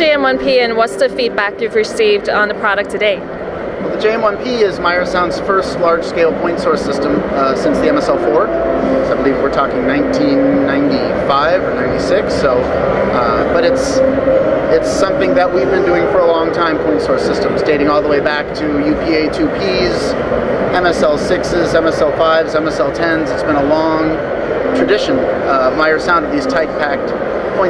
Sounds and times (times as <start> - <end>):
Speech: 3.8 - 14.1, 14.7 - 24.2, 24.8 - 27.6.